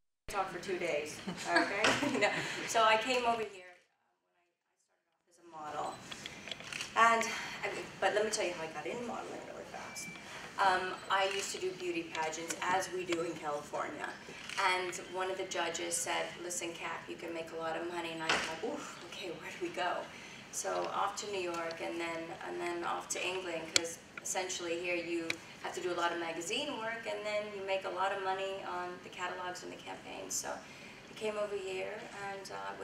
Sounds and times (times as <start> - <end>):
Speech: 7.0 - 30.6, 31.2 - 32.8.